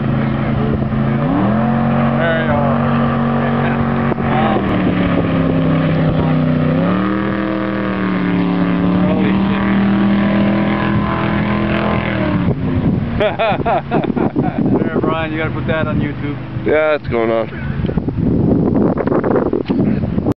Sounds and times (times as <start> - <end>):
Motorboat, speedboat: 0.0 - 20.3
Speech: 14.8 - 17.5.